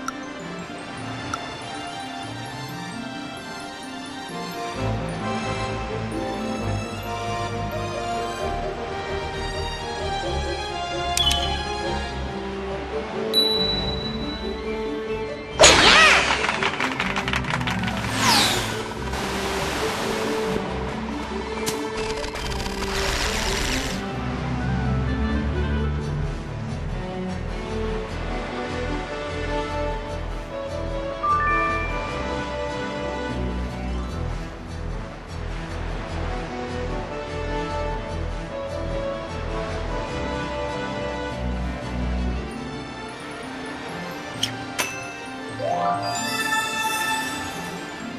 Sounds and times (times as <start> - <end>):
Music: 0.0 - 48.1.